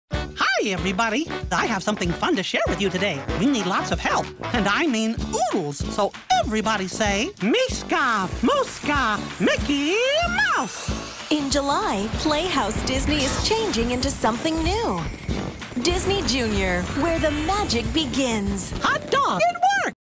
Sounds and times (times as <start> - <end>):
Music: 0.1 - 20.0.